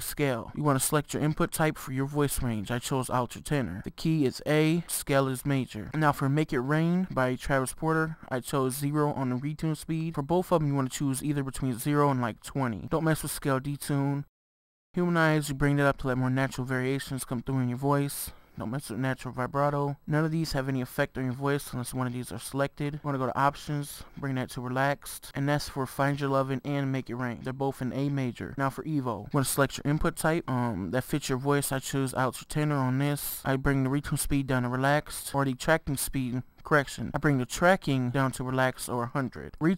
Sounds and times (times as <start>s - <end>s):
Speech: 0.0s - 14.3s, 15.0s - 39.7s.